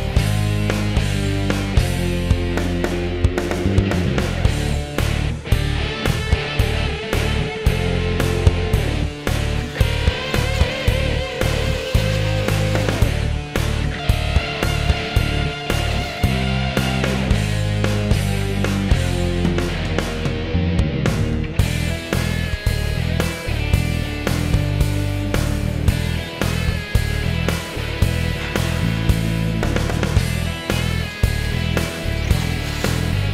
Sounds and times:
Music: 0.0 - 33.3.

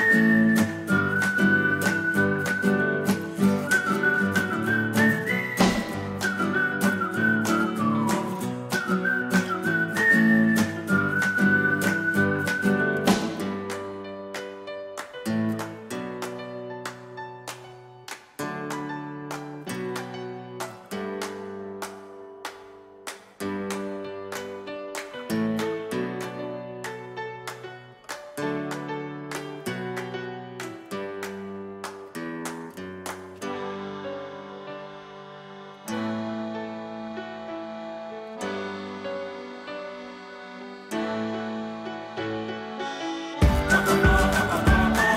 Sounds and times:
Music: 0.0 - 45.1.

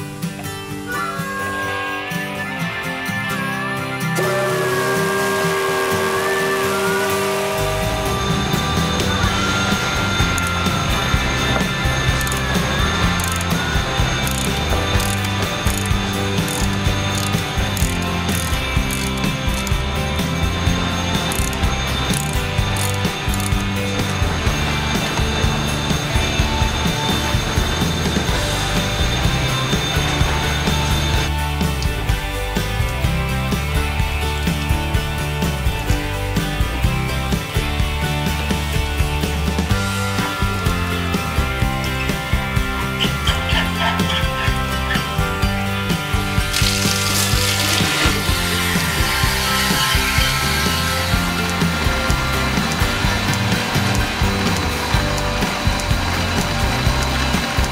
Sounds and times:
Music: 0.0 - 57.7.

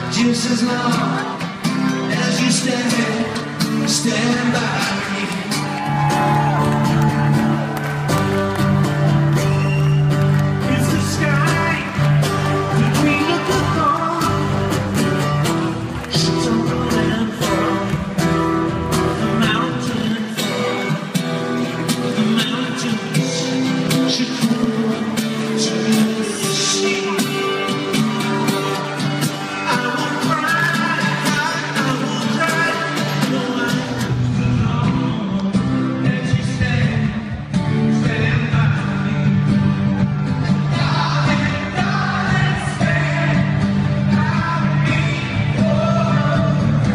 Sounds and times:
Male singing: 0.0 - 5.9, 10.6 - 12.0, 12.7 - 14.6, 16.1 - 18.2, 19.1 - 21.1, 21.8 - 28.0, 29.4 - 39.6, 40.5 - 46.9
Music: 0.0 - 46.9.

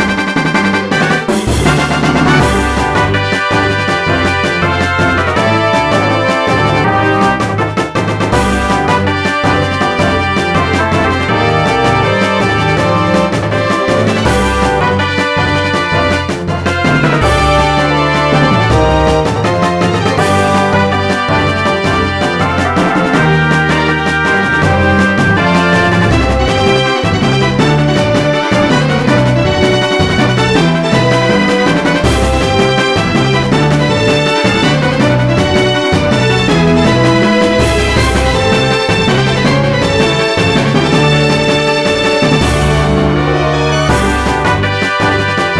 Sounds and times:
Music: 0.0 - 45.5.

